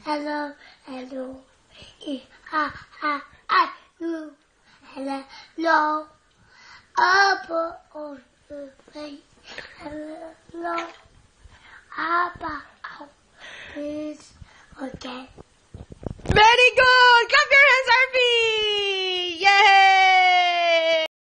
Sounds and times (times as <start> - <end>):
Speech: 16.3 - 21.1.